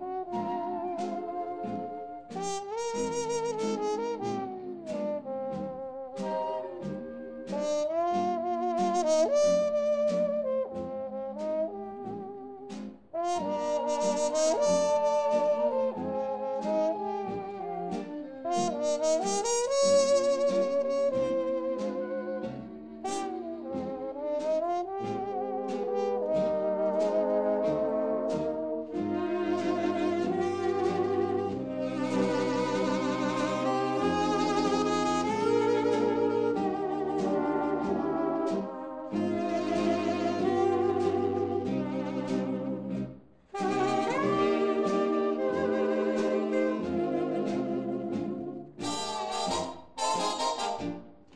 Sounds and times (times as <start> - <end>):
Bowed string instrument: 0.0 - 51.3.